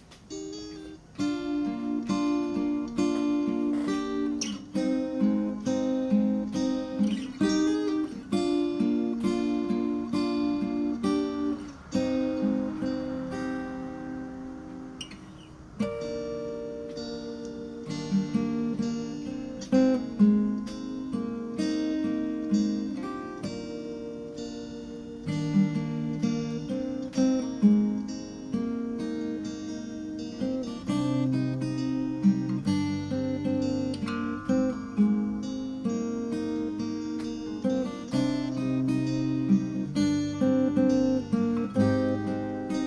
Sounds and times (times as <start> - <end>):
Acoustic guitar: 0.0 - 42.8
Strum: 0.0 - 42.8.